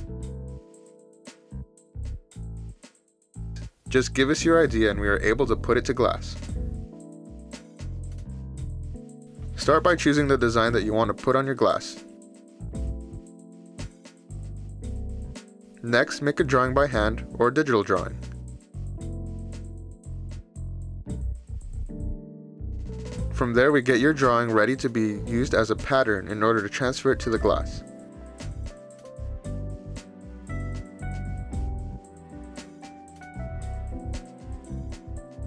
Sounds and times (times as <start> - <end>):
Music: 0.0 - 35.4
Speech: 3.9 - 6.5, 9.6 - 12.0, 15.8 - 18.3, 23.3 - 27.8.